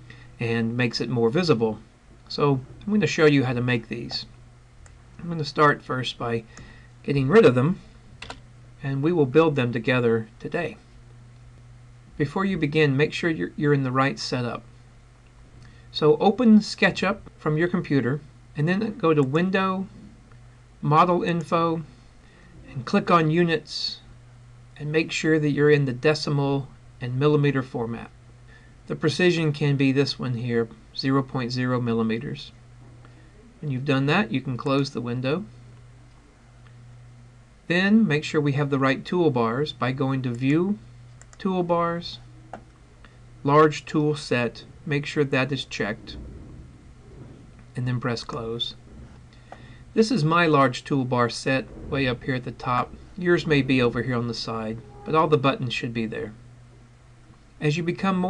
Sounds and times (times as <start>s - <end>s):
Speech: 0.4s - 4.3s, 5.2s - 7.8s, 8.8s - 10.8s, 12.2s - 14.7s, 15.9s - 20.0s, 20.8s - 21.9s, 22.6s - 24.1s, 24.8s - 28.2s, 28.9s - 32.6s, 33.6s - 35.5s, 37.7s - 42.3s, 43.4s - 46.2s, 47.8s - 48.8s, 50.0s - 56.4s, 57.6s - 58.3s.